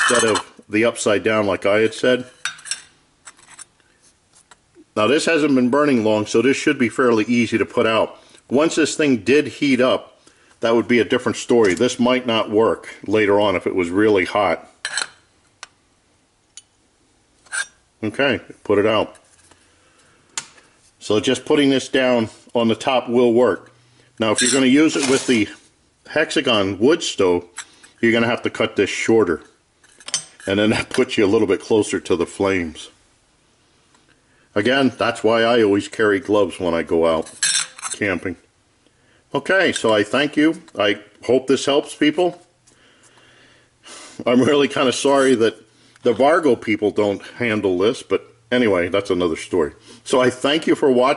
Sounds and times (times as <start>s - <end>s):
Speech: 0.0s - 2.4s, 4.9s - 14.8s, 18.0s - 19.2s, 21.0s - 29.6s, 30.5s - 33.0s, 34.5s - 38.5s, 39.3s - 42.5s, 44.2s - 51.1s
Inside, small room: 0.0s - 51.1s.